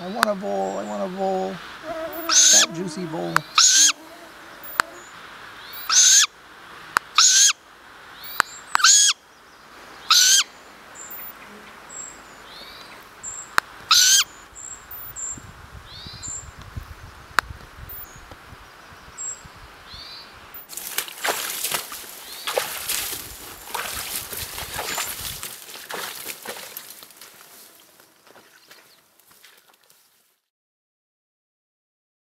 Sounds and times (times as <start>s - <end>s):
Owl: 1.7s - 6.3s, 7.2s - 7.6s, 8.2s - 9.2s, 10.0s - 11.4s, 13.9s - 14.4s.